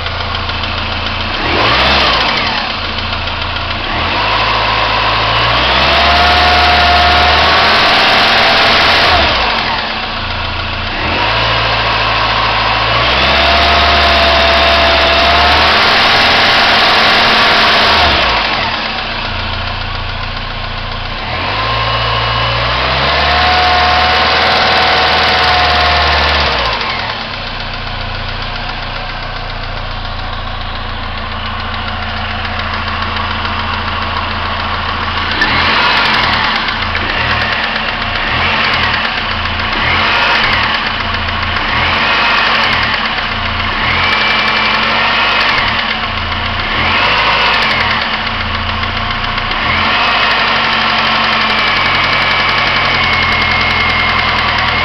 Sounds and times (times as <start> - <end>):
Idling: 0.0 - 54.8
Medium engine (mid frequency): 0.0 - 54.8
Vehicle: 0.0 - 54.8
Accelerating, revving, vroom: 1.4 - 2.8, 3.8 - 10.0, 10.9 - 19.0, 21.2 - 27.2, 35.3 - 46.0, 46.6 - 48.2, 49.5 - 54.8.